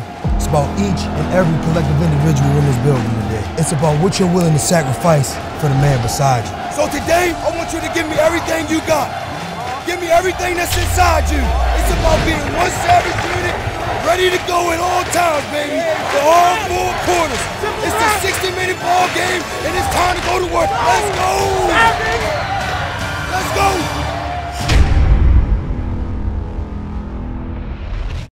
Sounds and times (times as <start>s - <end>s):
Music: 0.0s - 28.3s
Speech: 0.3s - 9.1s, 9.8s - 22.3s.